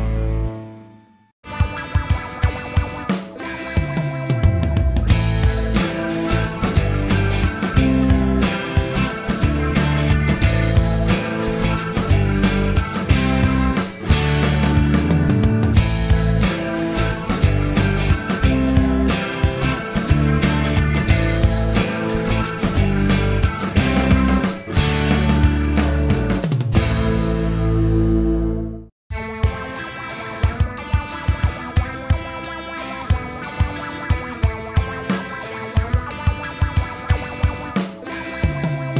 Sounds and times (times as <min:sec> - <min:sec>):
Music: 0:00.0 - 0:38.9.